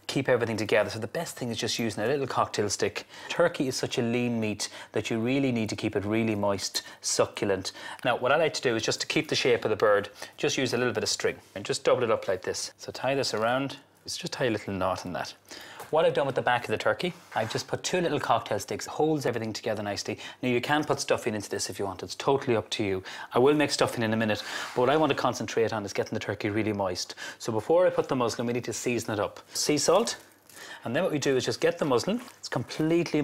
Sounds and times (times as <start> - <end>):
Speech: 0.1 - 33.2.